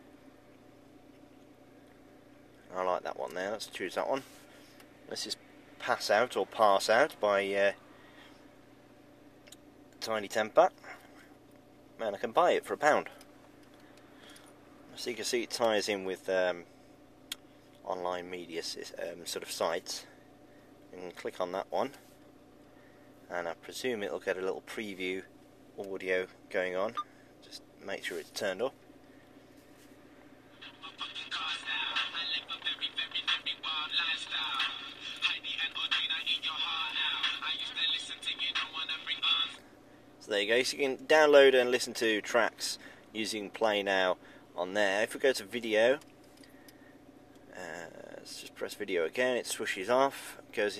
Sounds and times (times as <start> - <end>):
Speech: 2.7 - 4.3, 5.1 - 7.8, 10.0 - 10.9, 12.0 - 13.2, 14.9 - 16.7, 17.8 - 20.1, 20.9 - 22.0, 23.3 - 28.8, 40.2 - 46.0, 47.5 - 50.7
Music: 30.6 - 39.6.